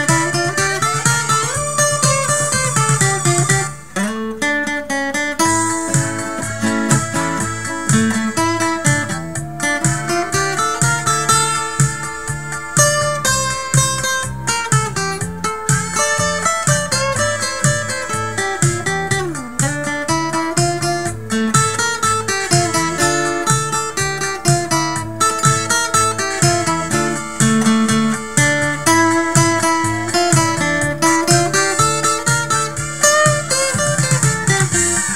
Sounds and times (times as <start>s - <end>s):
Sad music: 5.5s - 19.2s.